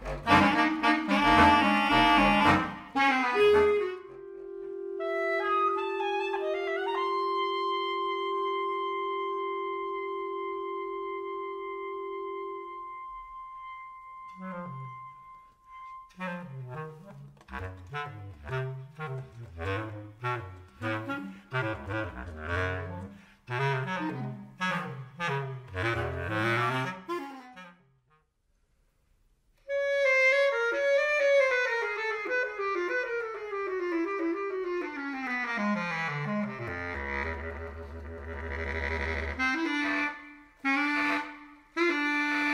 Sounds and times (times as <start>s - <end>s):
Saxophone: 0.0s - 28.3s, 29.6s - 42.5s
Clarinet: 0.0s - 28.4s, 29.6s - 42.5s.